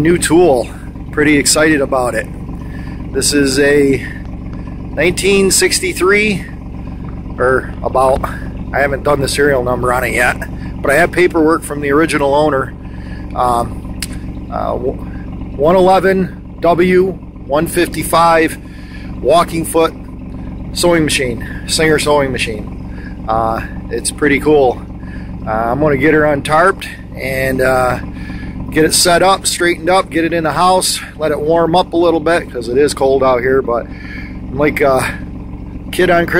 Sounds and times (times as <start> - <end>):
Speech: 0.0 - 2.3, 3.1 - 4.2, 5.0 - 6.6, 7.4 - 12.7, 13.3 - 13.8, 14.5 - 15.0, 15.6 - 18.6, 19.2 - 20.0, 20.8 - 22.7, 23.3 - 24.8, 25.4 - 28.0, 28.7 - 33.9, 34.5 - 35.2, 35.9 - 36.3
Outside, urban or manmade: 0.0 - 36.3.